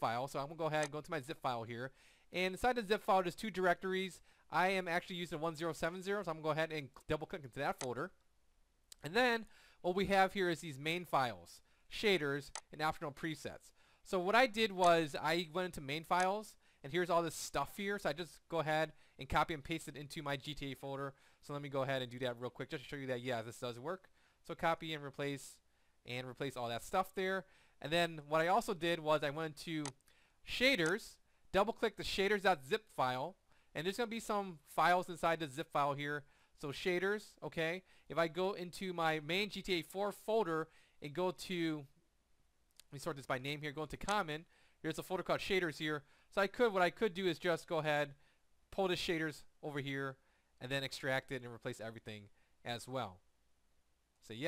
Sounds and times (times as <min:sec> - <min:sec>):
Speech: 0:00.0 - 0:08.2, 0:09.0 - 0:42.0, 0:42.8 - 0:53.2, 0:54.2 - 0:54.4.